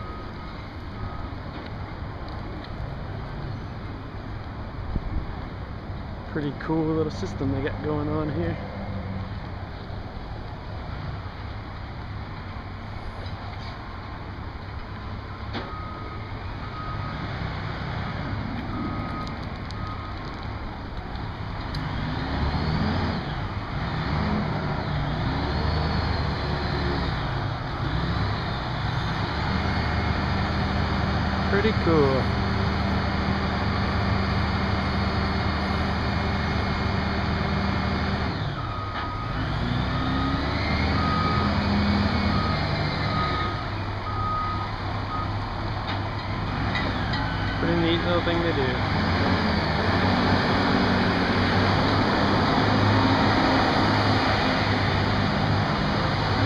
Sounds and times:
Outside, urban or manmade: 0.0s - 56.4s.

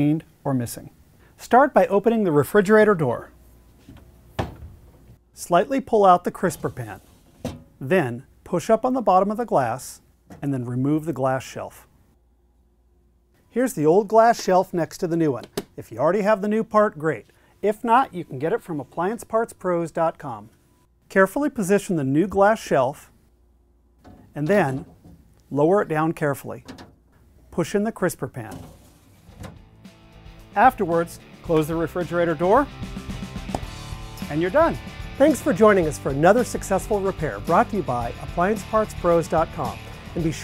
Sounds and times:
Speech: 0.0s - 3.3s, 5.4s - 7.1s, 7.8s - 11.9s, 13.5s - 20.5s, 21.1s - 23.1s, 24.3s - 24.9s, 25.5s - 26.7s, 27.5s - 28.7s, 30.6s - 32.7s, 34.2s - 40.4s.

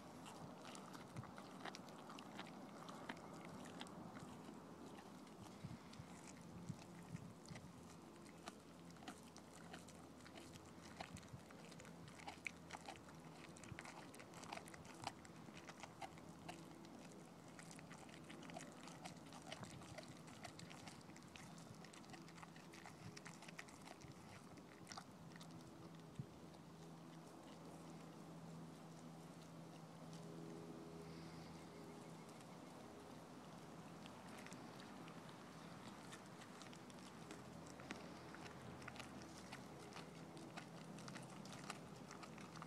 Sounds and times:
Dog: 0.0s - 42.6s.

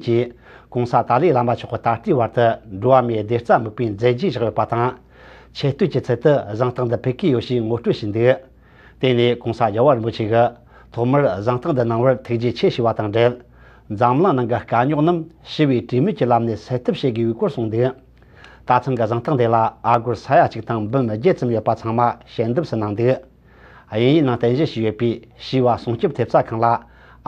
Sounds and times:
Speech: 0.0s - 5.0s, 5.6s - 18.1s, 18.7s - 23.3s, 23.9s - 26.9s.

